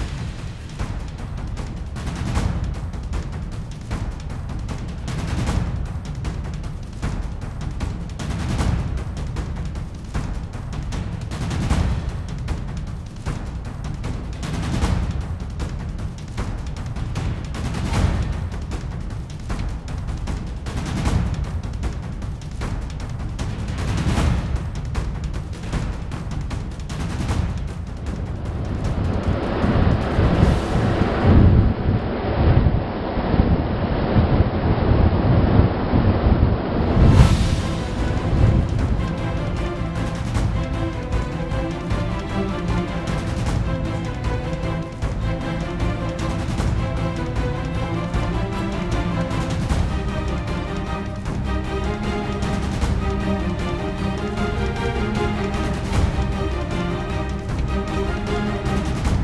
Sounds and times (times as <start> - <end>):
Music: 0.0 - 32.6, 36.8 - 59.2.